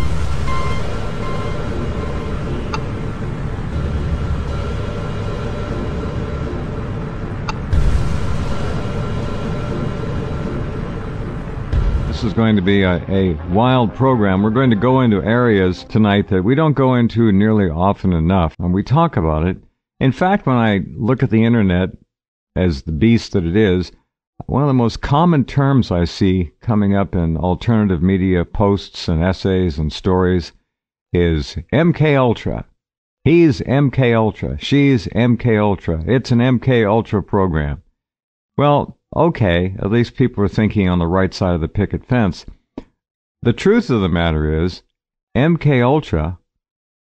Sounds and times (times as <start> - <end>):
Speech synthesizer: 12.2 - 22.0, 22.6 - 30.6, 31.2 - 32.7, 33.3 - 37.8, 38.6 - 42.5, 43.5 - 44.8, 45.4 - 46.4.